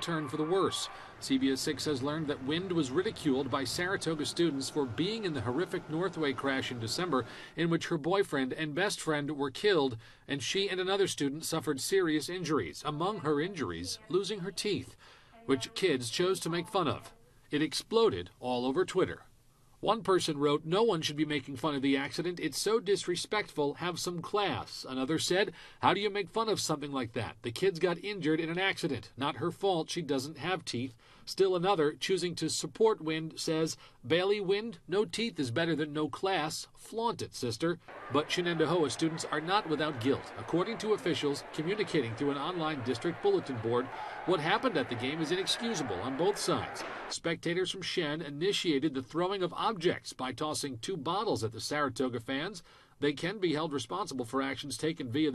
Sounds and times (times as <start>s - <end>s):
Speech: 0.0s - 55.3s.